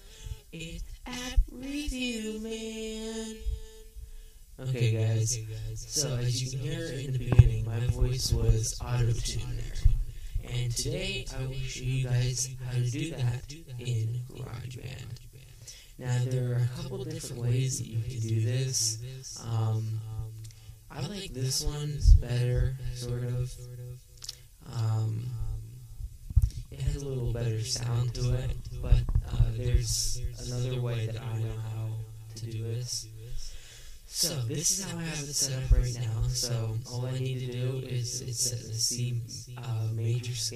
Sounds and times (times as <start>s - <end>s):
Speech: 0.0s - 3.6s, 4.6s - 20.3s, 20.9s - 25.8s, 26.4s - 33.4s, 34.1s - 40.5s.